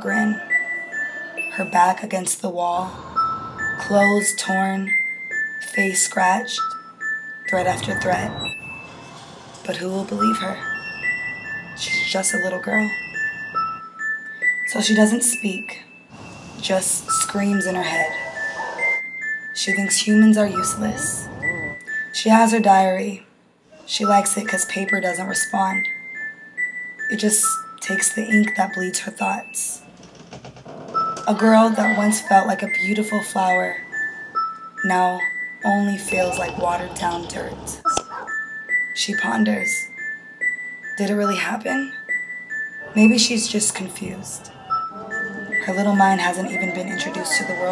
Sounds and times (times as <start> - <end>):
Speech: 0.0 - 0.4, 1.5 - 3.0, 3.8 - 4.9, 5.6 - 6.6, 7.5 - 8.4, 9.7 - 10.6, 11.8 - 13.0, 14.7 - 15.8, 16.6 - 18.1, 19.6 - 23.2, 23.8 - 25.9, 27.1 - 29.8, 31.3 - 33.8, 34.9 - 38.0, 39.0 - 39.9, 41.0 - 41.9, 42.9 - 44.6, 45.6 - 47.7
Sad music: 7.5 - 14.6, 20.1 - 22.0, 42.5 - 47.7.